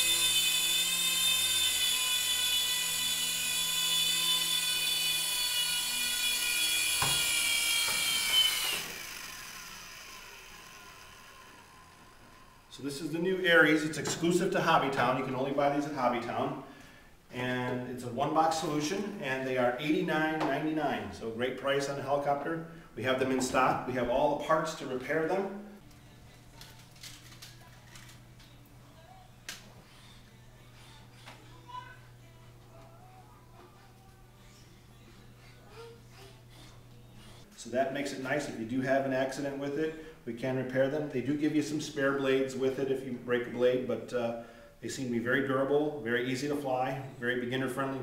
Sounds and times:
Speech: 12.8s - 16.6s, 17.3s - 25.7s, 37.6s - 48.0s.

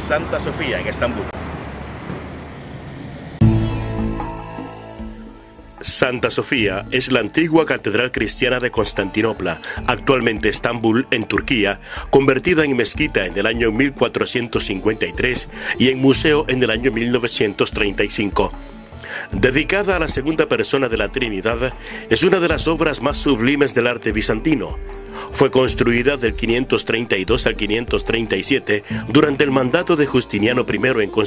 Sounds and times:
Speech: 0.0s - 1.4s, 5.8s - 18.6s, 19.4s - 24.8s, 25.4s - 31.2s
Music: 3.4s - 31.2s.

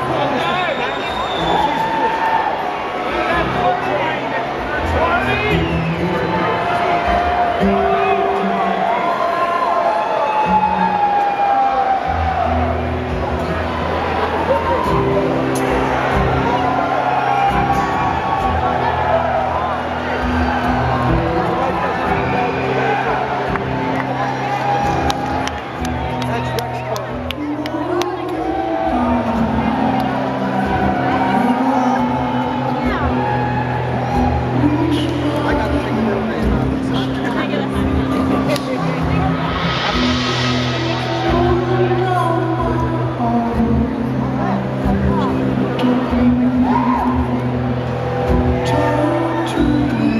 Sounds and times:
Music: 0.0s - 50.1s
Speech: 3.0s - 9.0s, 26.0s - 30.1s, 34.3s - 47.6s.

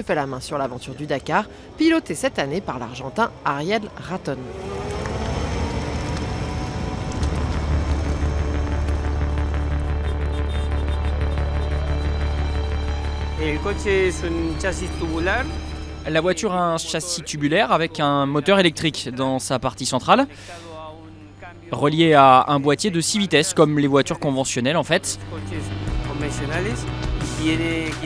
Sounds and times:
Music: 7.2s - 18.8s, 20.3s - 28.0s
Speech: 13.4s - 15.5s, 16.1s - 28.0s.

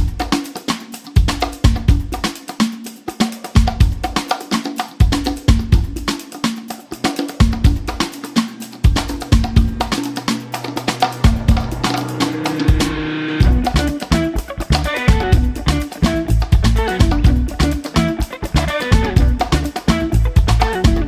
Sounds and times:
Music: 0.0s - 21.0s.

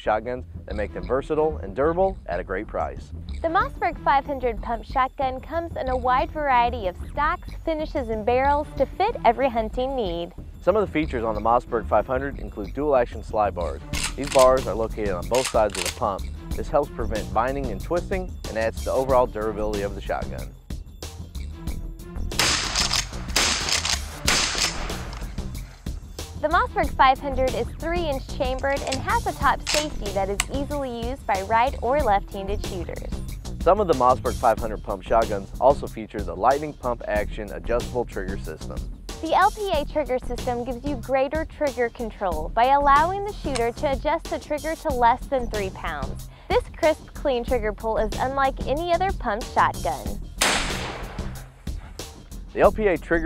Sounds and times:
Speech: 0.0s - 20.5s, 26.4s - 33.1s, 33.7s - 50.2s, 52.6s - 53.2s
Music: 0.0s - 53.2s.

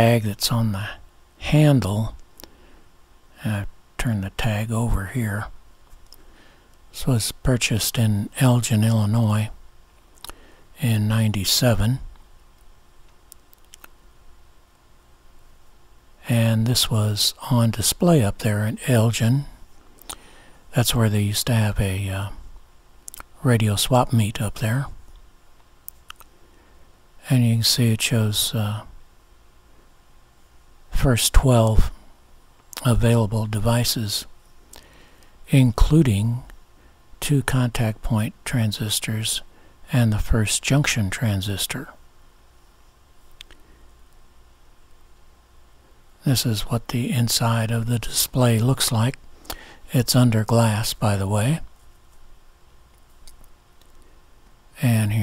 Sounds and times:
Speech: 0.0s - 2.2s, 3.4s - 5.6s, 6.9s - 9.6s, 10.8s - 12.1s, 16.2s - 19.6s, 20.7s - 22.4s, 23.2s - 25.0s, 27.2s - 29.0s, 30.9s - 32.0s, 32.8s - 34.3s, 35.5s - 36.6s, 37.2s - 42.0s, 46.2s - 49.2s, 49.9s - 51.7s, 54.8s - 55.2s.

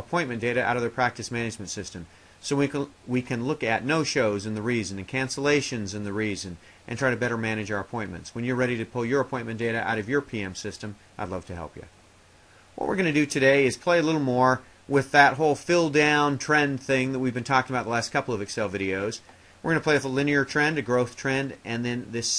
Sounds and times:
Speech: 0.0s - 12.0s, 12.8s - 22.3s.

